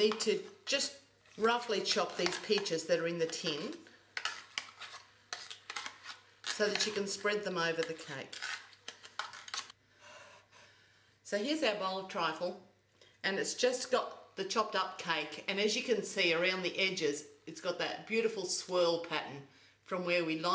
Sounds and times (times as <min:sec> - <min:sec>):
Speech: 0:06.5 - 0:08.3, 0:11.3 - 0:12.6, 0:13.3 - 0:20.5.